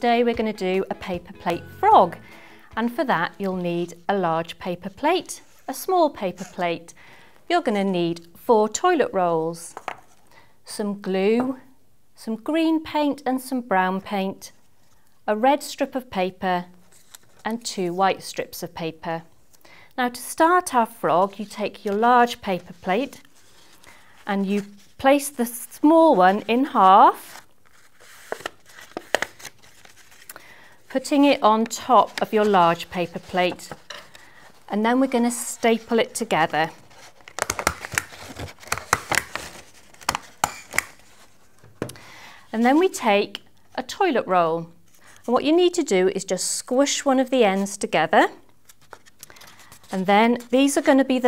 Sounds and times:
Speech: 10.7s - 14.5s, 15.3s - 16.7s, 17.5s - 19.3s, 20.0s - 23.2s, 24.3s - 27.3s, 30.9s - 33.7s, 34.7s - 36.8s, 42.5s - 48.4s, 49.9s - 51.2s.

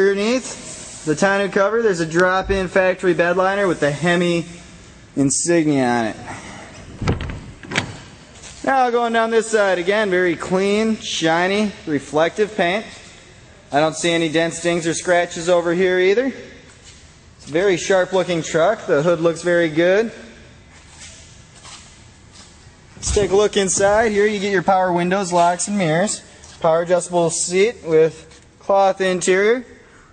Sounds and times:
Speech: 0.0s - 4.5s, 5.2s - 6.3s, 8.6s - 13.0s, 13.7s - 16.6s, 17.4s - 20.4s, 23.0s - 29.8s.

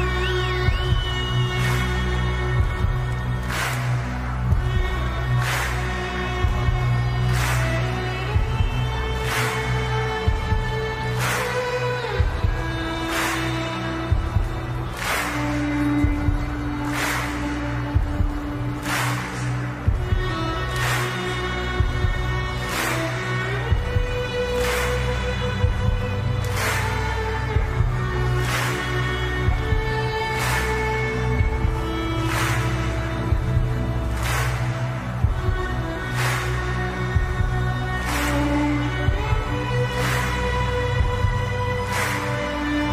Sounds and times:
Violin, fiddle: 0.0s - 42.9s.

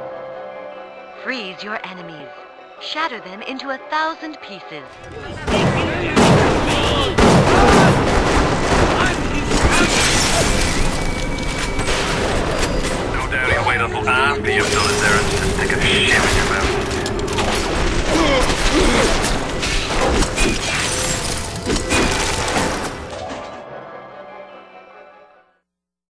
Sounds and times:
Music: 0.0s - 25.8s
Speech: 1.2s - 8.0s, 13.2s - 16.8s.

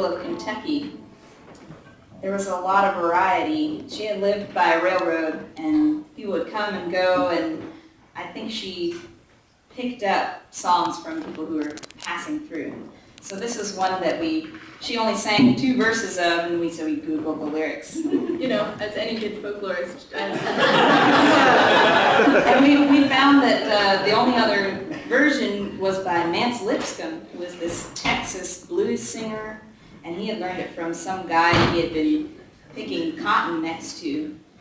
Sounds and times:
Speech: 2.2s - 9.1s, 9.8s - 20.4s, 22.2s - 34.4s.

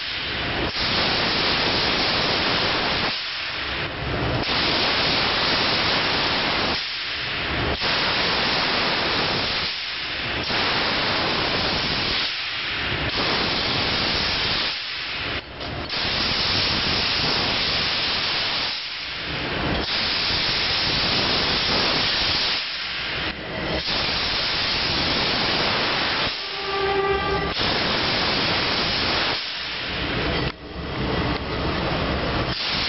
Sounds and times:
Steam: 0.0s - 32.8s.

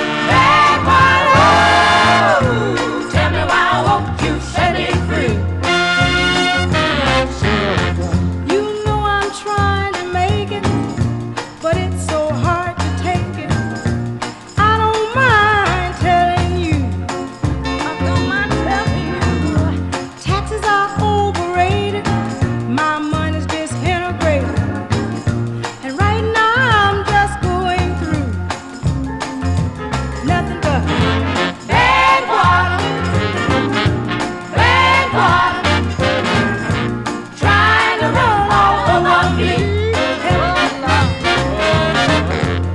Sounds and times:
Music: 0.0s - 42.7s.

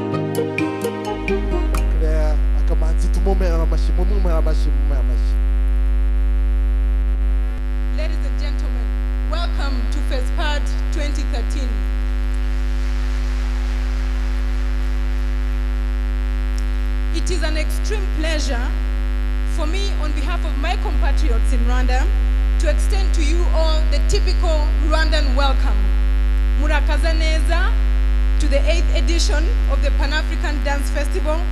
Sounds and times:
Female speech, woman speaking: 8.0s - 11.8s, 17.1s - 18.8s, 19.5s - 25.9s, 26.6s - 27.8s, 28.4s - 31.5s.

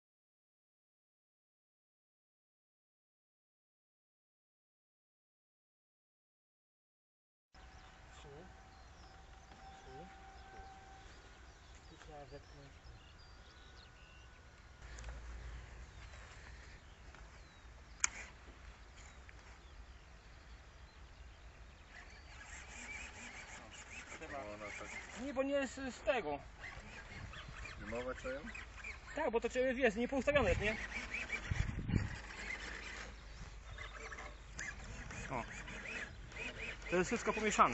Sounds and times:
Speech: 11.9s - 12.8s, 23.6s - 26.5s, 27.8s - 28.6s, 29.2s - 30.8s, 36.9s - 37.7s.

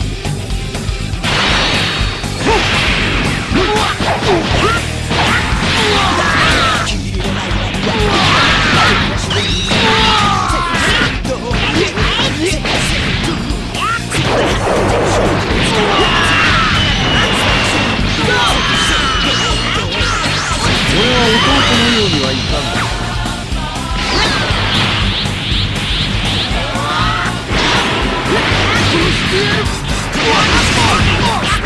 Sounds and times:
Music: 0.0s - 31.6s
Speech: 10.3s - 12.6s, 20.9s - 22.8s.

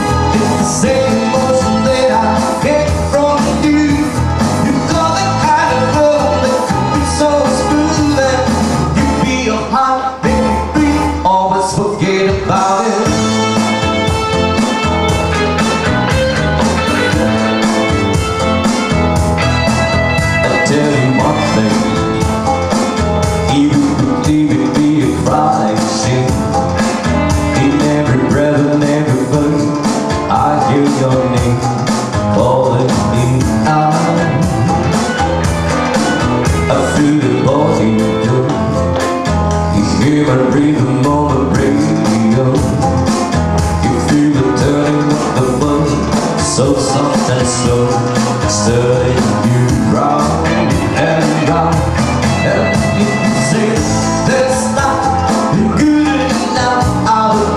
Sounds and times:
Music: 0.0s - 57.5s.

